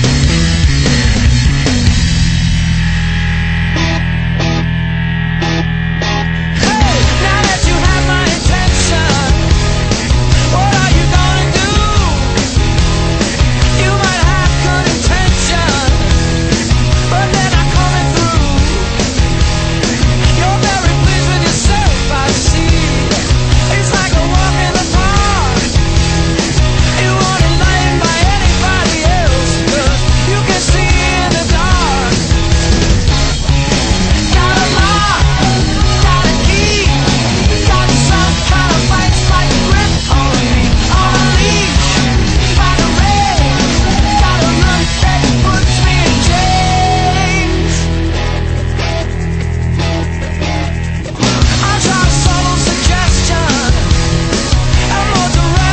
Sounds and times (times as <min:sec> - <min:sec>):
Exciting music: 0:00.0 - 0:55.7.